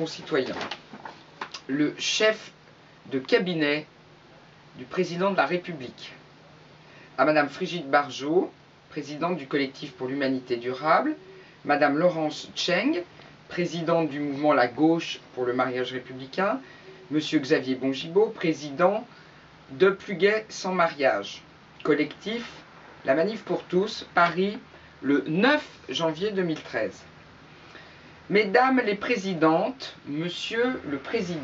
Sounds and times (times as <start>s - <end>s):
Speech: 0.0s - 0.7s, 1.6s - 3.9s, 4.8s - 6.2s, 7.2s - 19.1s, 19.7s - 27.1s, 28.3s - 31.4s.